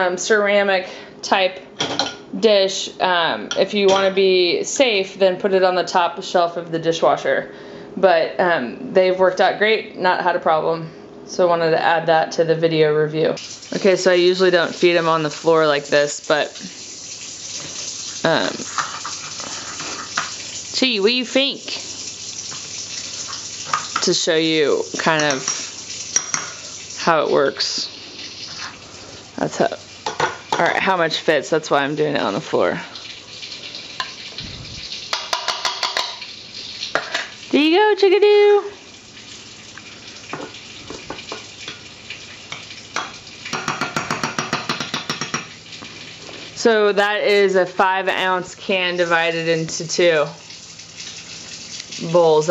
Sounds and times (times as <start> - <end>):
Dishes, pots, and pans: 1.8 - 2.2, 26.2 - 26.6, 35.1 - 36.2, 43.0 - 45.5
Cutlery, silverware: 25.2 - 26.5, 35.1 - 36.2.